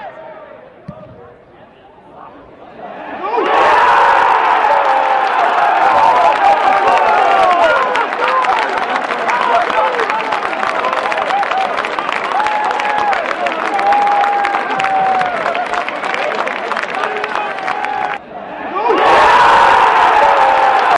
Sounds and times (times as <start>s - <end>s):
Speech: 0.0s - 3.4s, 6.5s - 11.3s, 15.8s - 18.2s.